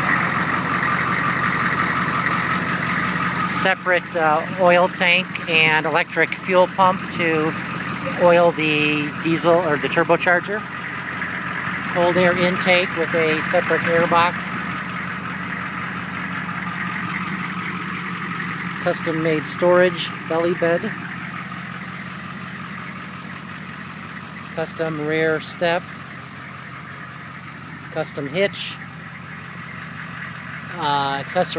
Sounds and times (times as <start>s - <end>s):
Vehicle: 0.0s - 31.5s
Speech: 3.5s - 10.6s, 12.0s - 14.6s, 18.8s - 21.0s, 24.6s - 25.9s, 27.9s - 28.8s, 30.7s - 31.5s.